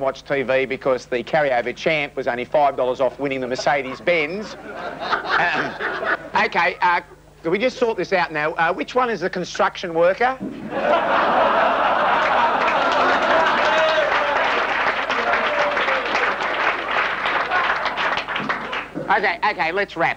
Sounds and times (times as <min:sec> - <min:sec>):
Speech: 0:00.0 - 0:04.6, 0:06.4 - 0:10.4, 0:19.1 - 0:20.1.